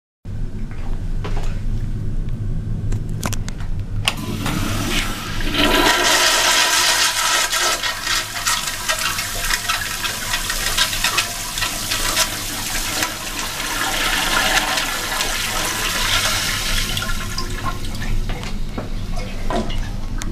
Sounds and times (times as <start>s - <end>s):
Toilet flush: 4.2s - 20.3s
Water: 7.9s - 20.3s.